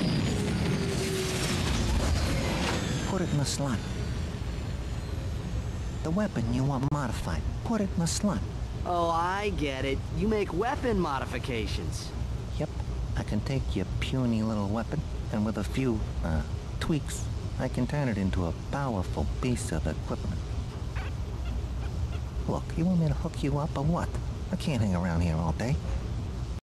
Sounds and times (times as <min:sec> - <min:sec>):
Speech: 0:06.0 - 0:20.4, 0:22.4 - 0:25.8.